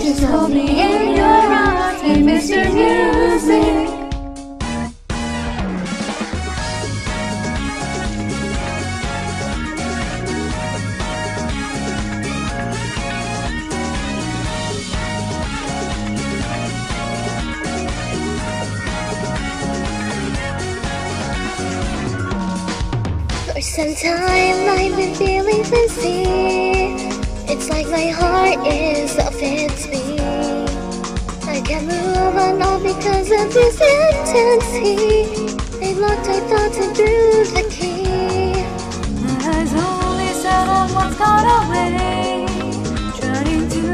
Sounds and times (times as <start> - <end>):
Soul music: 0.0 - 43.9.